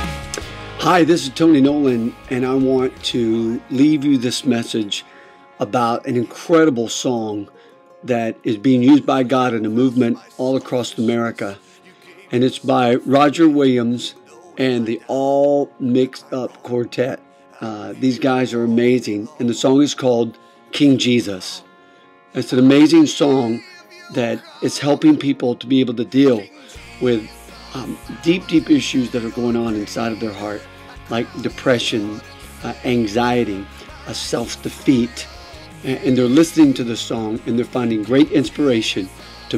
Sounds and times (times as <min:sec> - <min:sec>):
Music: 0:00.0 - 0:39.5
Speech: 0:00.8 - 0:05.0, 0:05.6 - 0:21.6, 0:22.4 - 0:39.5.